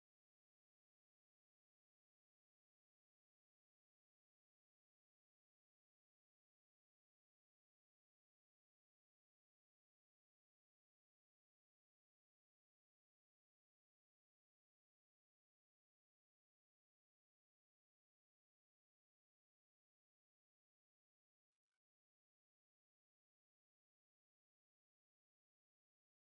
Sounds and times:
Music: 0.0 - 26.2.

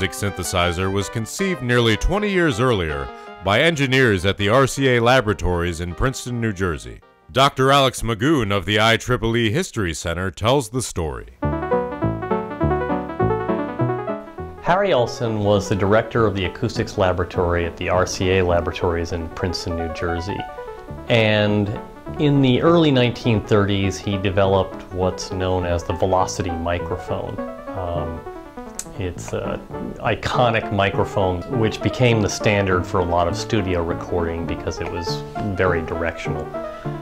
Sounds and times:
Music: 0.0 - 8.4, 11.4 - 37.0
Speech: 0.0 - 11.4, 14.6 - 20.5, 21.1 - 28.2, 28.8 - 36.6.

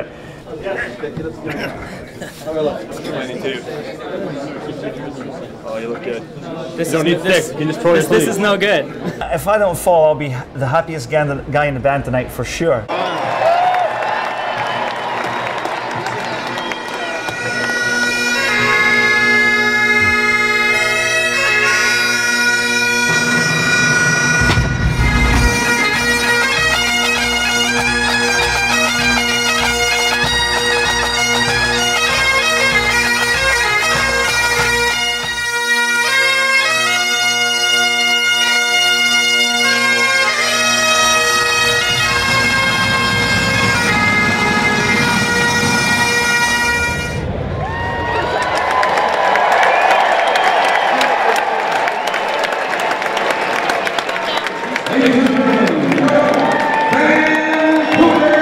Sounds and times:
Bagpipes: 16.1 - 47.4
Wind instrument, woodwind instrument: 16.2 - 48.3.

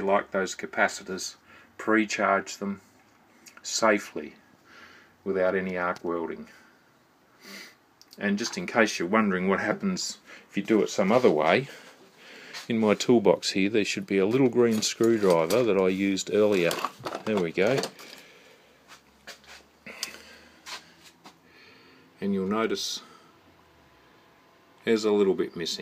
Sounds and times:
Speech: 0.0 - 2.9, 3.5 - 4.4, 5.2 - 6.6, 8.1 - 11.8, 12.7 - 18.0, 22.2 - 23.2, 24.8 - 25.8
Inside, small room: 0.0 - 25.8.

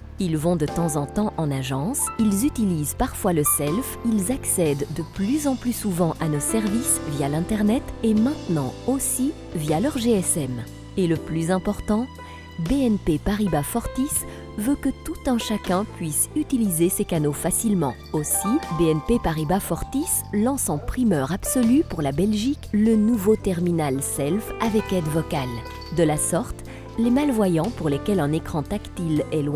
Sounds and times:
Music: 0.0 - 29.5
Speech: 0.2 - 29.5.

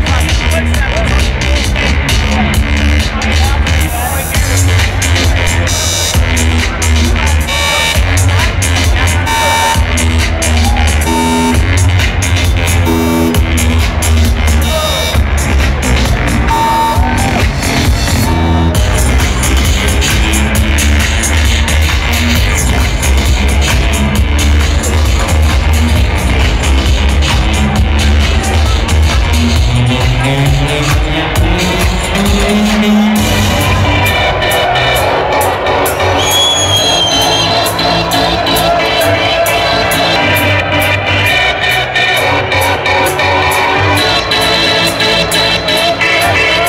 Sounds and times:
Techno: 0.0 - 46.6.

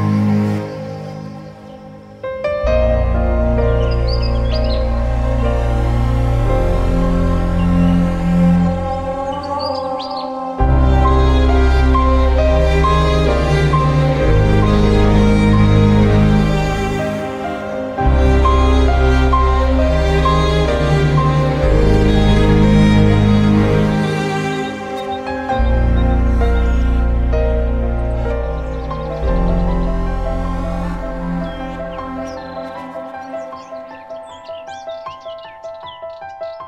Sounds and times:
Music: 0.0 - 36.6.

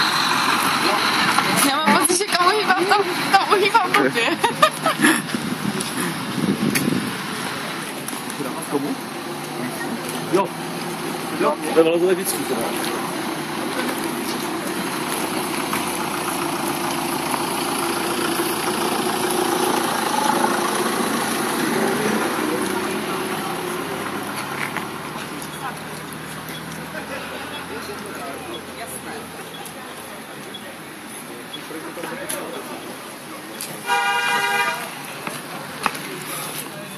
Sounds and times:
Vehicle: 0.0 - 36.9.

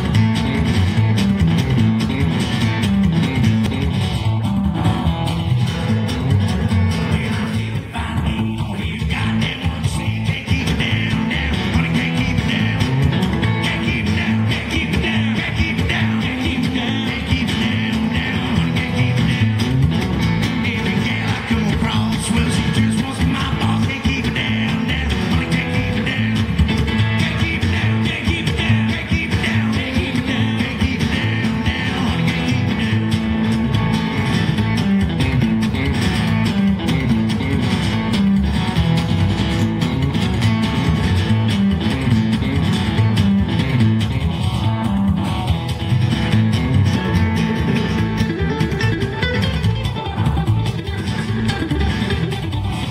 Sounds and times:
Country: 0.0 - 52.9
Singing: 7.0 - 19.8, 20.4 - 33.4.

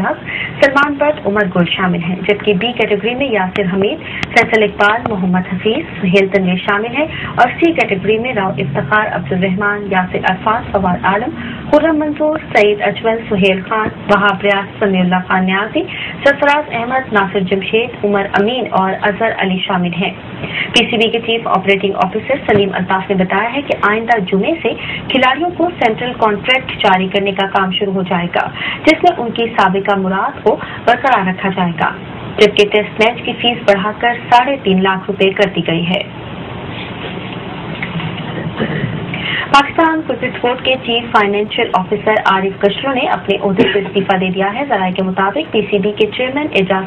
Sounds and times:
Speech: 0.0 - 36.1, 39.5 - 46.8.

